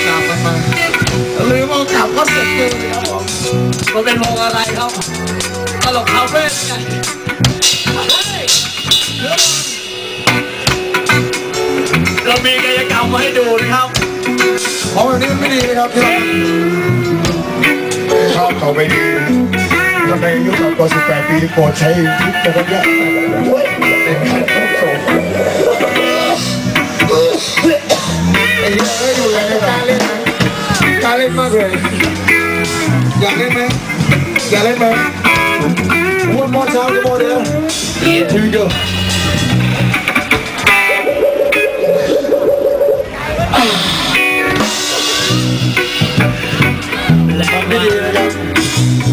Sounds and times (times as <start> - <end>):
Drum: 2.6 - 16.1.